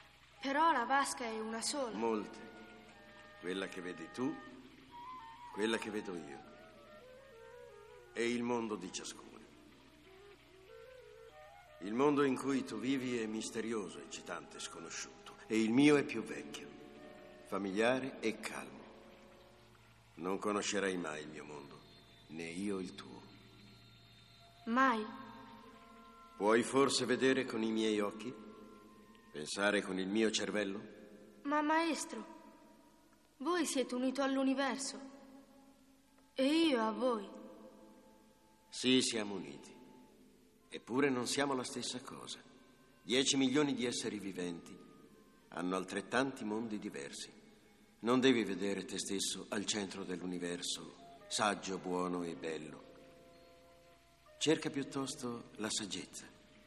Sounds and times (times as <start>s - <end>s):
Speech: 0.4s - 2.4s, 17.5s - 18.8s, 20.2s - 23.2s, 26.4s - 28.3s, 31.5s - 32.3s, 33.4s - 35.0s, 36.4s - 37.3s, 38.8s - 39.7s, 48.0s - 52.8s, 54.4s - 56.3s.